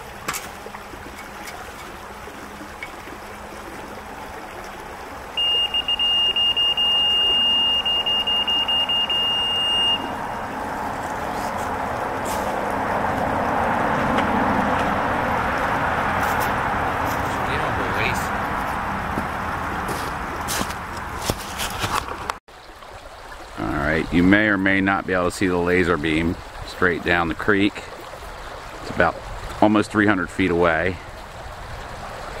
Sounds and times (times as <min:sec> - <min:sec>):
Stream: 0:00.0 - 0:32.4
Speech: 0:17.3 - 0:18.3, 0:23.6 - 0:27.9, 0:28.9 - 0:31.0.